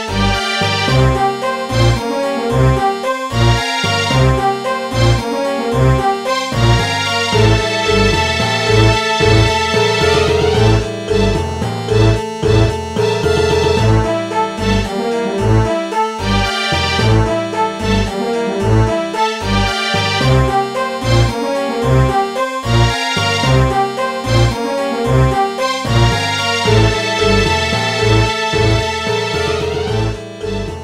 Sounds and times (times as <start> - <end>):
Theme music: 0.0 - 30.8.